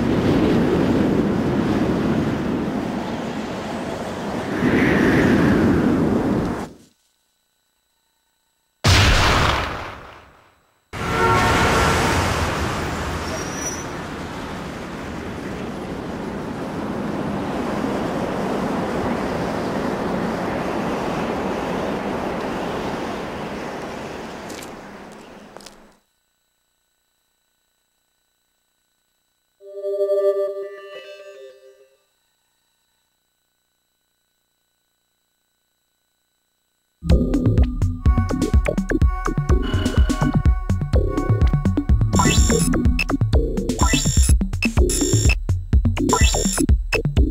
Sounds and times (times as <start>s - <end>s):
White noise: 0.0s - 29.6s.